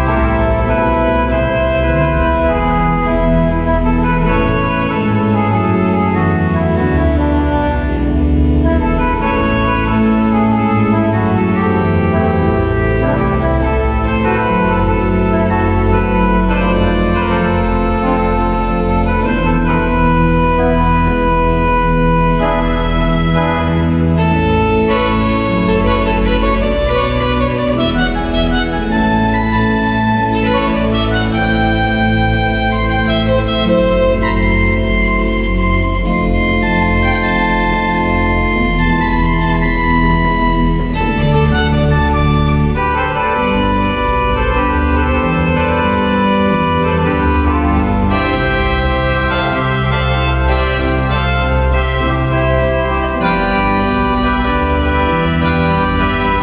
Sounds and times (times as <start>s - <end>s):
Organ: 0.0s - 56.4s.